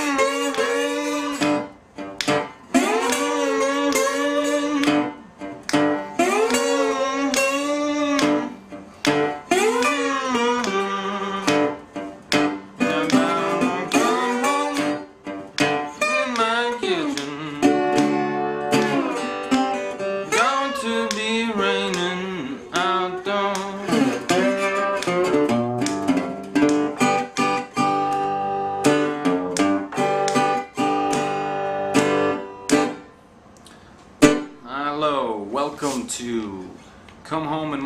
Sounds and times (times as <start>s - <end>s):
Strum: 0.0s - 35.2s.